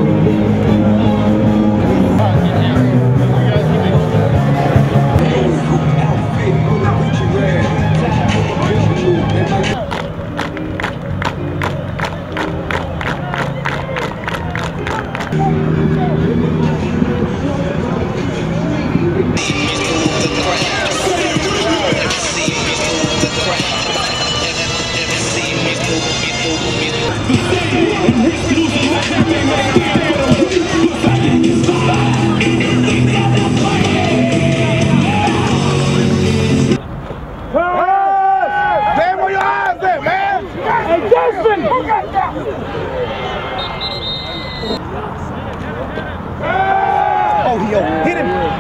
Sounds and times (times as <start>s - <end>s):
Music: 0.0s - 36.8s
Speech: 2.1s - 4.4s, 47.4s - 48.6s
Applause: 9.9s - 15.4s
Clapping: 9.9s - 15.4s.